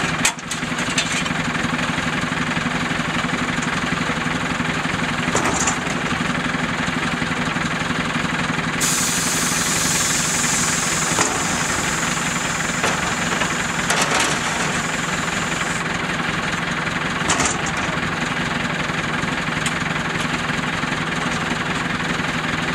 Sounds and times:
Truck: 0:00.0 - 0:22.7.

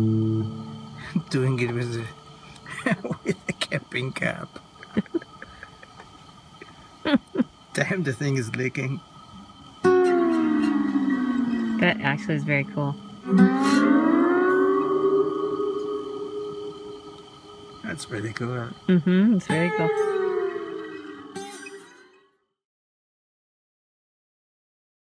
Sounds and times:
Guitar: 0:00.0 - 0:22.4
Speech: 0:01.1 - 0:04.5, 0:07.8 - 0:09.0, 0:11.8 - 0:13.0, 0:17.8 - 0:20.0.

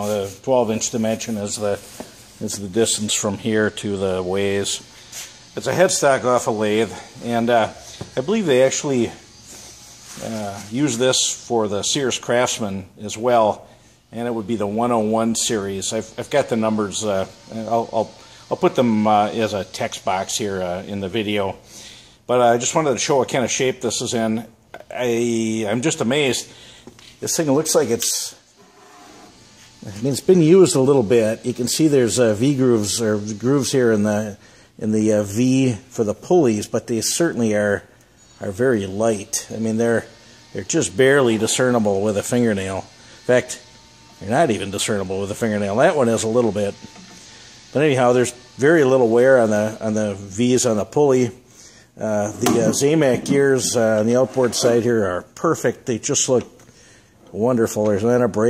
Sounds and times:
Speech: 0:00.0 - 0:04.9, 0:05.6 - 0:09.2, 0:10.2 - 0:21.6, 0:22.3 - 0:26.5, 0:27.2 - 0:28.5, 0:29.8 - 0:43.6, 0:44.2 - 0:46.8, 0:47.7 - 0:51.4, 0:52.0 - 0:56.6, 0:57.3 - 0:58.4.

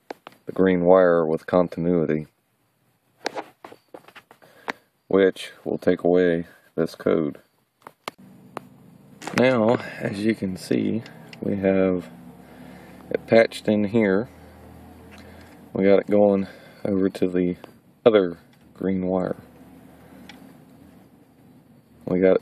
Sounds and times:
Speech: 0:00.5 - 0:02.4, 0:05.1 - 0:07.4, 0:09.2 - 0:12.1, 0:13.1 - 0:14.3, 0:15.7 - 0:19.5, 0:22.0 - 0:22.4
Motor vehicle (road): 0:03.4 - 0:22.4.

